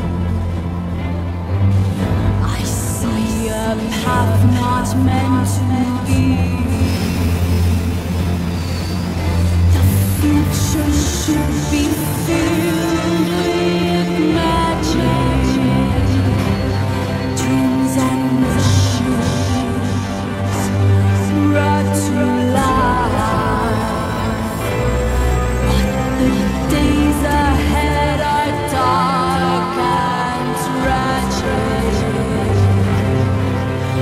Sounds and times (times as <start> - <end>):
Music: 0.0 - 34.0.